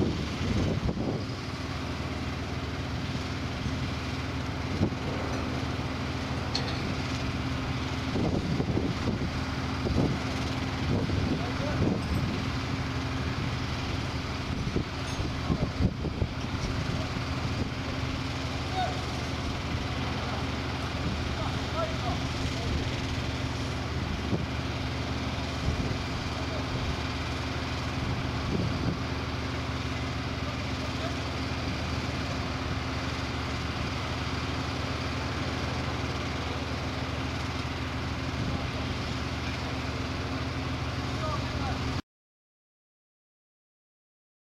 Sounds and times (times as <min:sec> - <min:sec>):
Outside, urban or manmade: 0:00.0 - 0:42.0
Vehicle: 0:00.0 - 0:42.0.